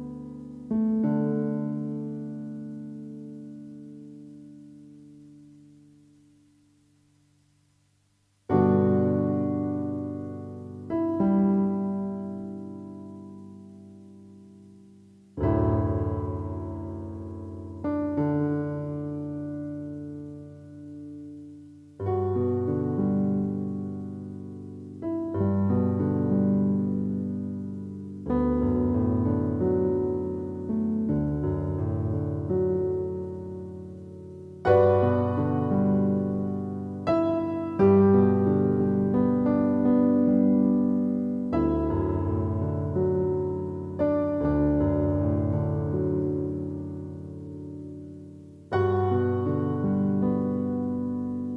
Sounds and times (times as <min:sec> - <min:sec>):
Music: 0:00.0 - 0:07.3, 0:08.4 - 0:51.5.